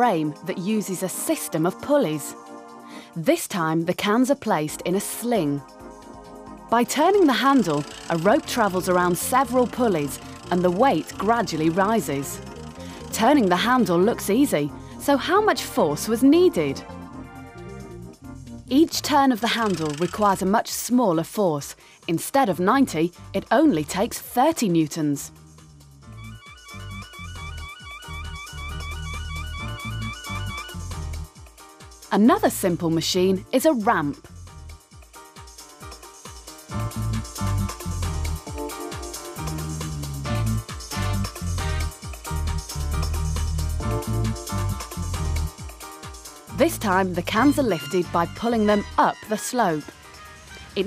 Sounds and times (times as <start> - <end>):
Gears: 6.9 - 13.9, 19.4 - 20.5
Pulleys: 6.9 - 13.9, 19.4 - 20.5
Ratchet, pawl: 6.9 - 14.3, 19.4 - 20.6.